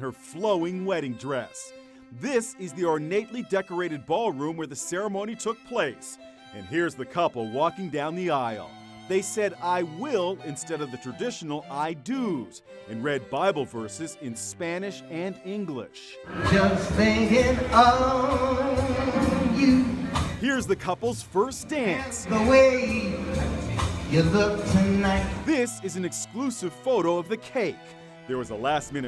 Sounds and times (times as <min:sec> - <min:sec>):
Speech: 0:00.0 - 0:16.2, 0:20.4 - 0:22.4, 0:25.1 - 0:29.0
Music: 0:00.0 - 0:29.0
Inside, large room or hall: 0:16.2 - 0:20.4.